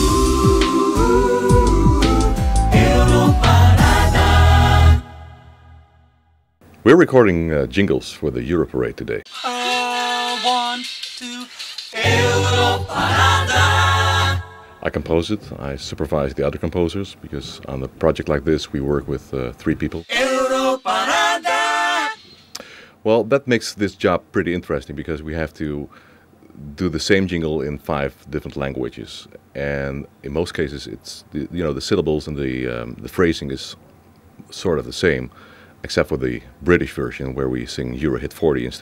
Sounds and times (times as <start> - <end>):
Music: 0.0 - 5.8, 9.3 - 14.9
Male singing: 1.7 - 5.0, 9.3 - 13.5, 20.1 - 22.2
Speech: 6.8 - 9.6, 14.8 - 20.2, 23.0 - 25.9, 26.5 - 33.8, 34.4 - 38.8.